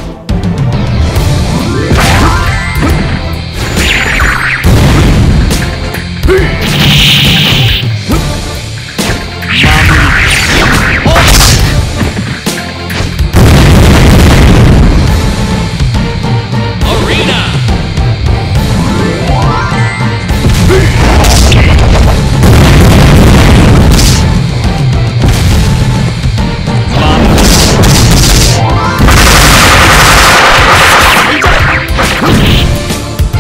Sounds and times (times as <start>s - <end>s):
Music: 0.0s - 33.4s
Speech: 16.8s - 17.7s.